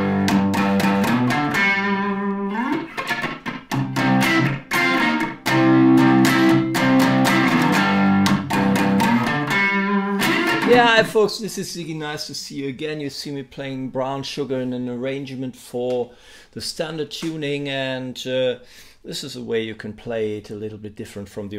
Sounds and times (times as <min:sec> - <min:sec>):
Strum: 0:00.0 - 0:11.3
Speech: 0:10.6 - 0:21.5.